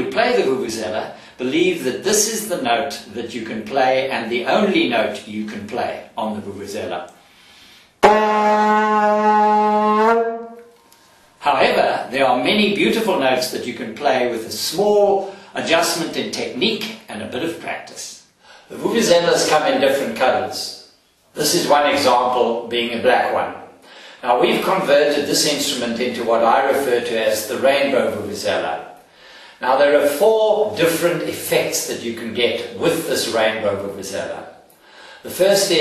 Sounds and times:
Speech: 0:00.0 - 0:07.1, 0:11.4 - 0:29.0, 0:29.6 - 0:34.6, 0:35.2 - 0:35.8.

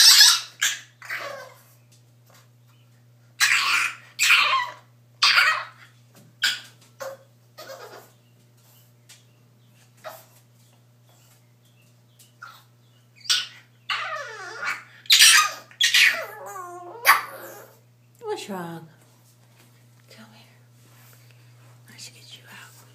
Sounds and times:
Animal: 0:03.4 - 0:08.9, 0:12.3 - 0:17.8
Speech: 0:18.2 - 0:19.0.

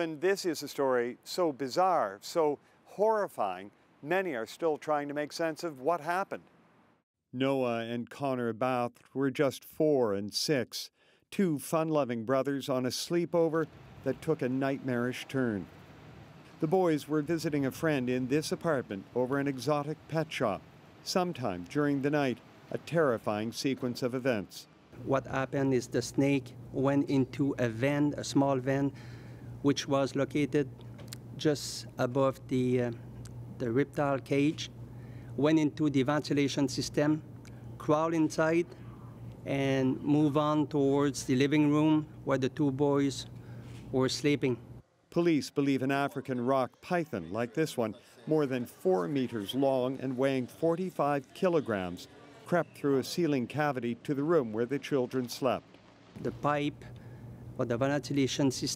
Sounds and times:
Speech: 0:00.0 - 0:06.4, 0:07.4 - 0:15.7, 0:16.6 - 0:29.0, 0:29.6 - 0:30.7, 0:31.4 - 0:33.0, 0:33.6 - 0:34.7, 0:35.4 - 0:38.8, 0:39.4 - 0:43.3, 0:43.9 - 0:55.6, 0:56.2 - 0:56.9, 0:57.6 - 0:58.7.

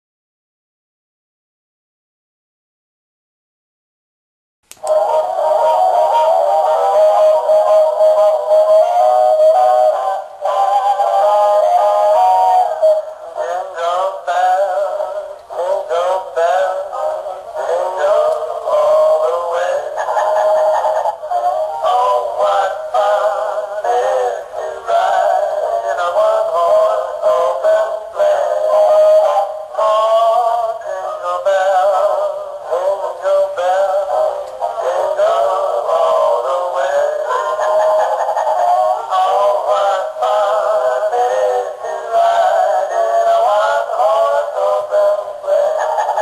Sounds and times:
Synthetic singing: 0:04.8 - 0:46.2.

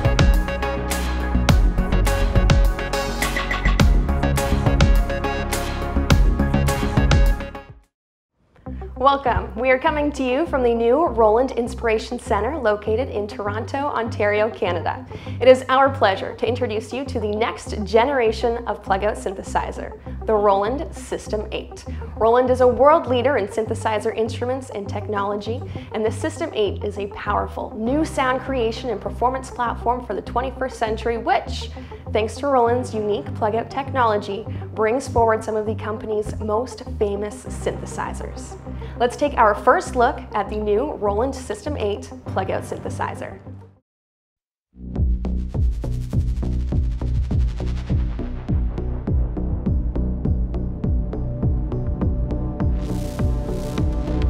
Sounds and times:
Music: 0:00.0 - 0:43.8, 0:44.7 - 0:54.2
Speech: 0:09.0 - 0:43.4.

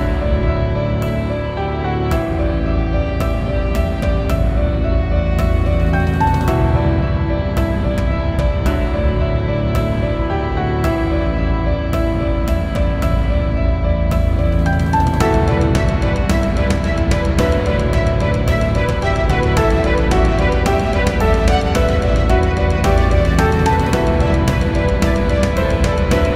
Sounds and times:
Music: 0:00.0 - 0:26.3.

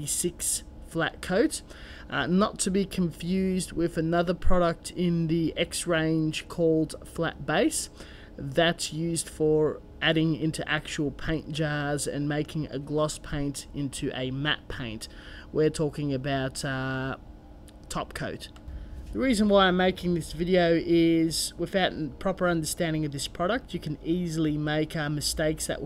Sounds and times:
Speech: 0:00.0 - 0:17.2, 0:17.9 - 0:18.6, 0:19.2 - 0:25.8.

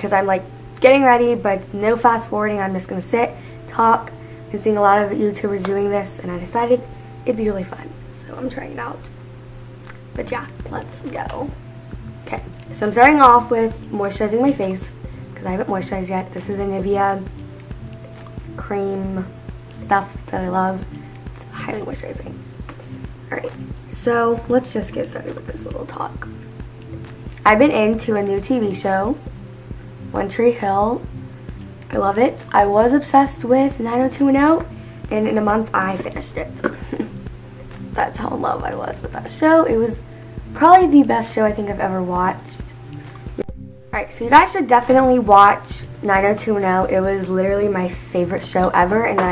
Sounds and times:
Speech: 0:00.0 - 0:09.0, 0:10.2 - 0:11.6, 0:23.3 - 0:26.3, 0:27.4 - 0:29.2, 0:31.9 - 0:36.6, 0:38.0 - 0:40.0, 0:40.6 - 0:42.6, 0:44.0 - 0:49.3
Inside, small room: 0:00.0 - 0:49.3
Music: 0:00.0 - 0:49.3.

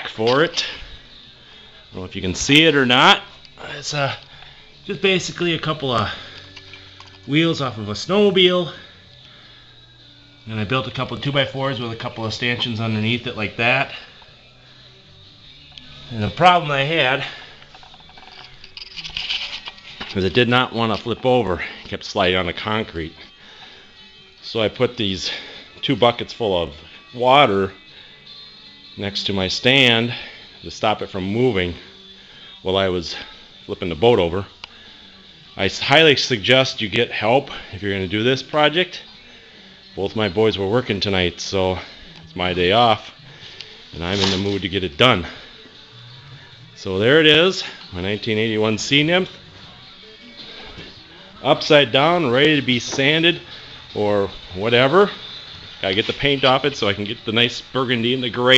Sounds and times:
Speech: 0:00.0 - 0:00.8, 0:02.0 - 0:04.2, 0:04.9 - 0:06.2, 0:07.3 - 0:08.8, 0:10.5 - 0:14.0, 0:16.1 - 0:17.3, 0:20.1 - 0:23.2, 0:24.4 - 0:27.8, 0:29.0 - 0:31.8, 0:32.7 - 0:34.5, 0:35.6 - 0:39.0, 0:40.0 - 0:43.1, 0:44.0 - 0:45.4, 0:46.8 - 0:49.4, 0:51.4 - 0:53.4, 0:54.0 - 0:55.2, 0:55.8 - 0:58.5
Music: 0:00.0 - 0:58.5.

